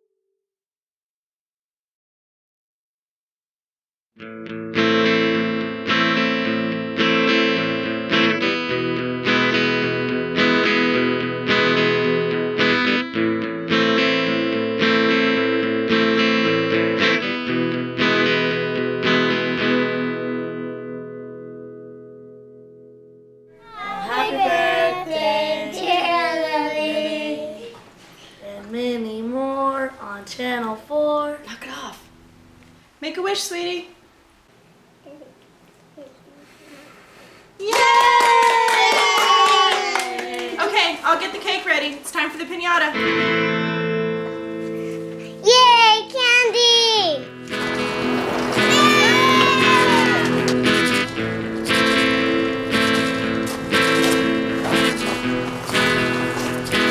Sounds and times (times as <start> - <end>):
Music: 4.2 - 27.3, 42.9 - 46.2, 47.1 - 56.9.